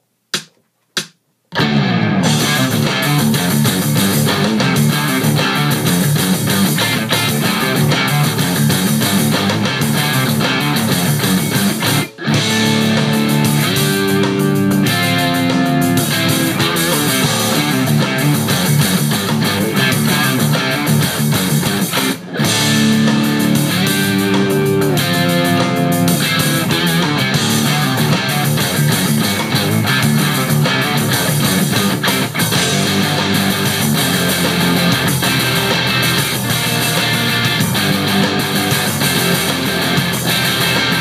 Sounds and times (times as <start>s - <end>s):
Bass guitar: 1.5s - 41.0s
Strum: 1.6s - 41.0s.